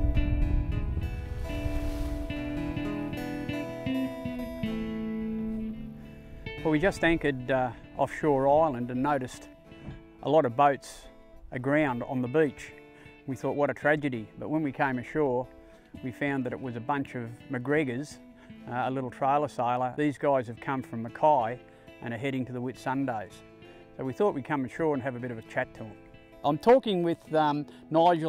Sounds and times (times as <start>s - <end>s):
Music: 0.0s - 28.2s
Speech: 6.6s - 9.5s, 10.2s - 23.4s, 24.0s - 28.2s.